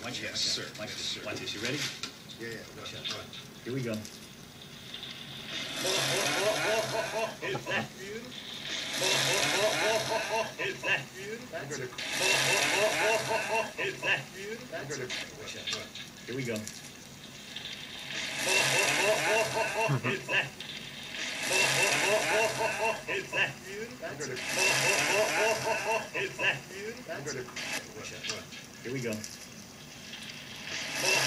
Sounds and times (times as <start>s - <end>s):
Inside, small room: 0.0s - 31.2s.